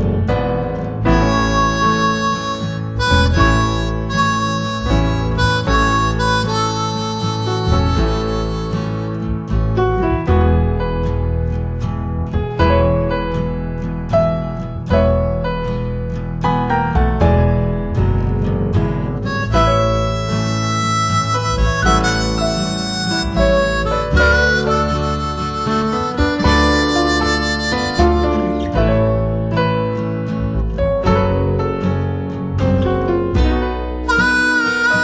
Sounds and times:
Music: 0.0 - 35.0.

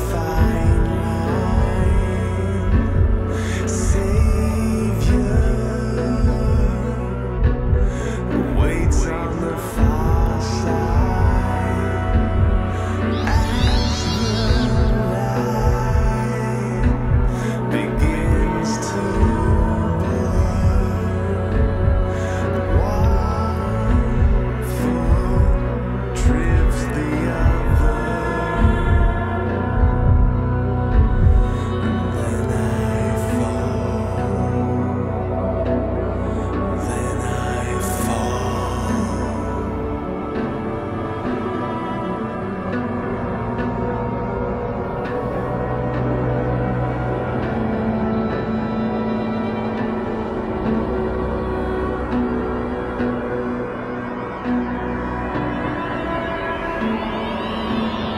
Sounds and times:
Scary music: 0.0 - 58.1.

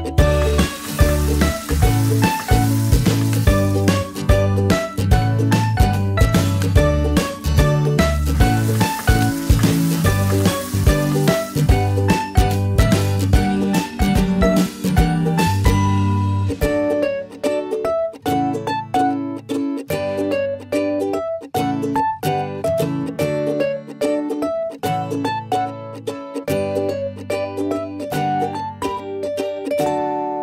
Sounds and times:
Music: 0.0 - 30.4.

